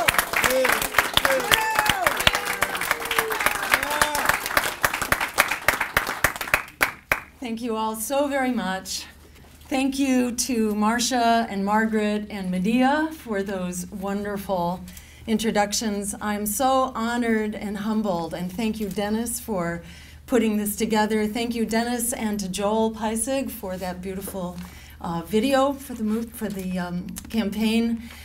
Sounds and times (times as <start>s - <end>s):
Narration, monologue: 7.3s - 28.2s
Female speech, woman speaking: 7.4s - 28.0s.